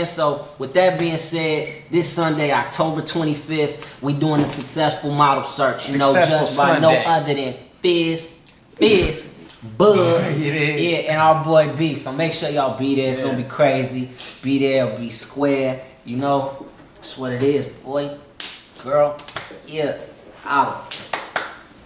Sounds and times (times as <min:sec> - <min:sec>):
Speech: 0:00.0 - 0:20.9.